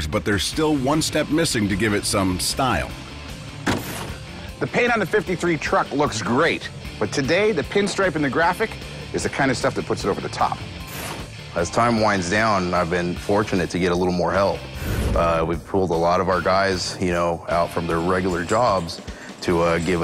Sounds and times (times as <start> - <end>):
Speech: 0.0 - 2.9, 4.6 - 10.6, 11.6 - 20.0
Music: 0.0 - 20.0.